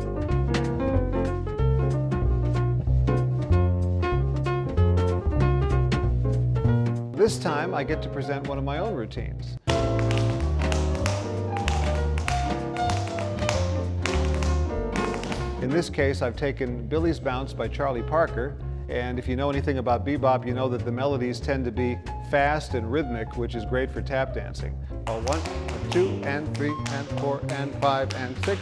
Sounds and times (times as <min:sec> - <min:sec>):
Music: 0:00.0 - 0:28.6
Speech: 0:07.2 - 0:09.6, 0:15.6 - 0:28.6.